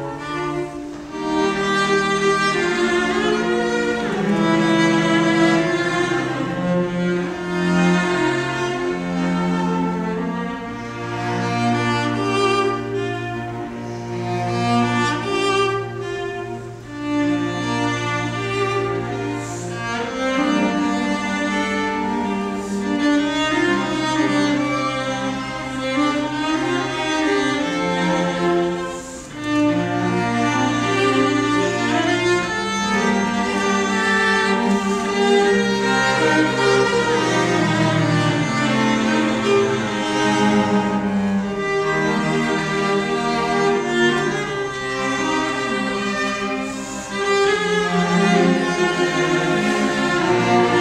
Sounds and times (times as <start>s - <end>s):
String section: 0.0s - 50.8s.